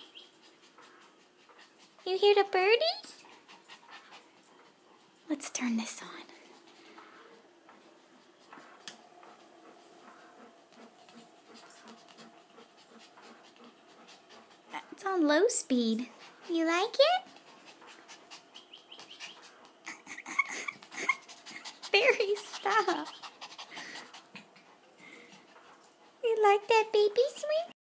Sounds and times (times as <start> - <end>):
Speech: 2.0 - 3.2, 14.8 - 17.3, 22.0 - 23.0, 26.2 - 27.8.